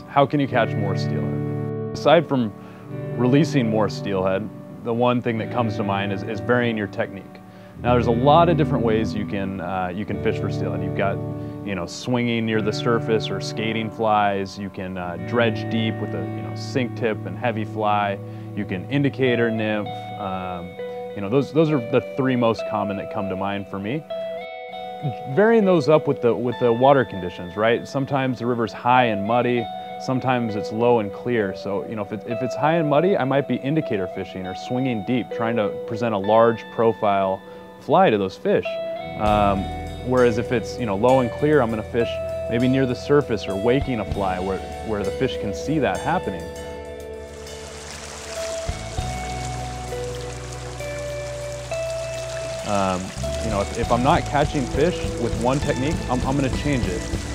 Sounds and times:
Speech: 0.0s - 1.4s, 2.0s - 2.6s, 3.2s - 24.0s, 25.0s - 46.5s, 52.7s - 57.1s
Music: 0.0s - 57.3s.

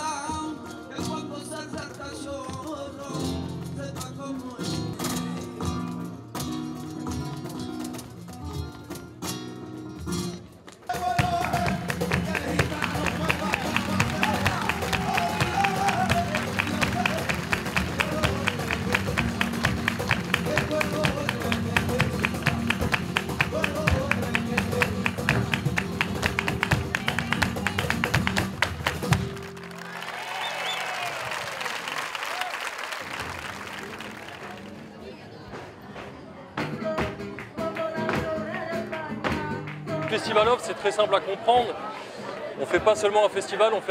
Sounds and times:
Flamenco: 0.0s - 30.1s, 32.4s - 43.5s.

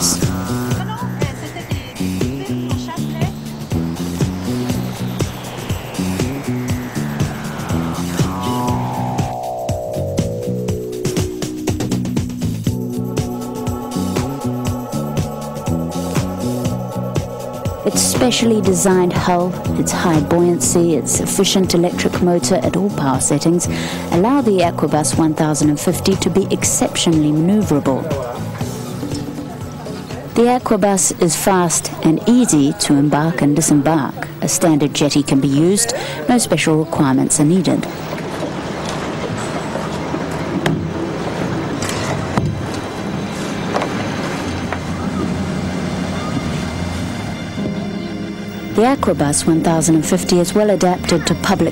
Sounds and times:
Music: 0.0s - 38.1s, 41.8s - 51.7s.

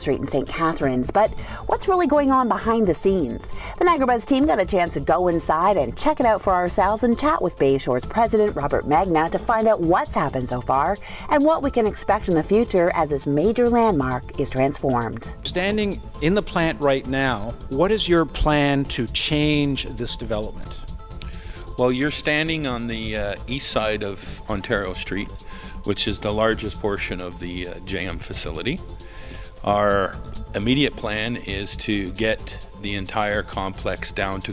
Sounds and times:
Speech: 0.0s - 20.6s, 21.8s - 28.8s, 29.7s - 34.5s
Music: 0.0s - 34.5s.

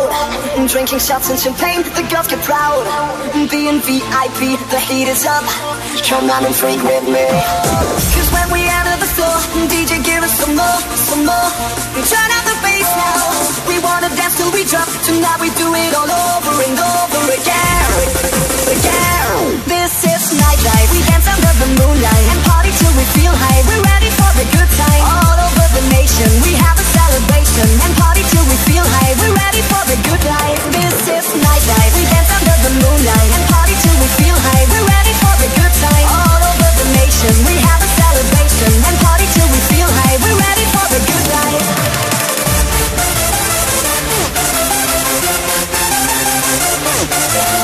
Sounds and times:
Techno: 0.0s - 47.6s.

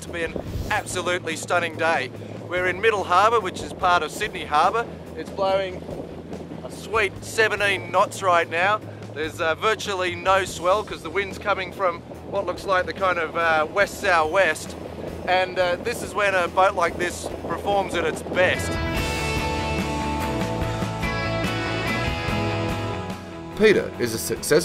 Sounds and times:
Speech: 0.0s - 5.8s, 6.7s - 18.8s, 23.6s - 24.6s
Music: 0.0s - 24.6s
Sailboat, sailing ship: 0.0s - 24.6s.

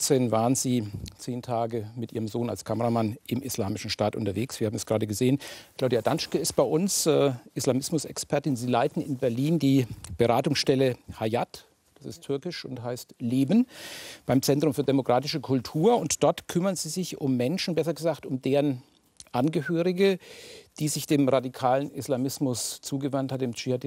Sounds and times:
Speech: 0.0s - 13.7s, 14.3s - 20.2s, 20.8s - 23.8s.

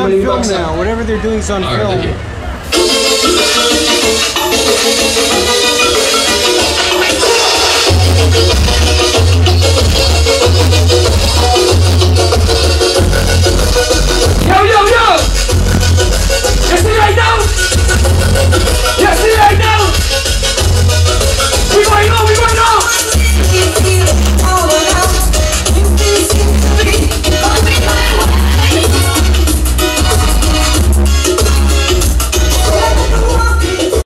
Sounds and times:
Music: 2.6s - 34.0s.

